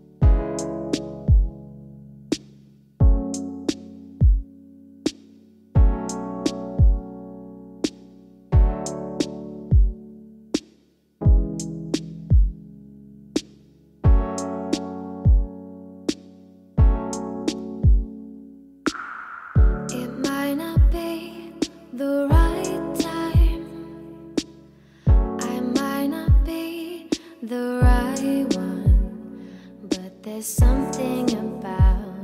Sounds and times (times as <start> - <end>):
Music: 0.0 - 32.2.